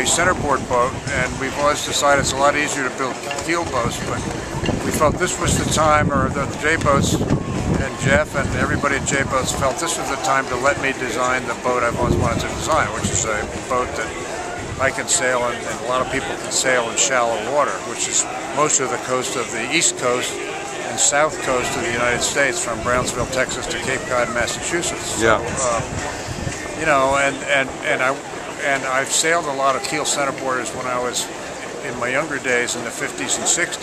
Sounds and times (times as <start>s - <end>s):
Speech: 0.0s - 4.2s, 4.8s - 7.2s, 7.8s - 14.2s, 14.8s - 26.0s, 26.8s - 33.8s.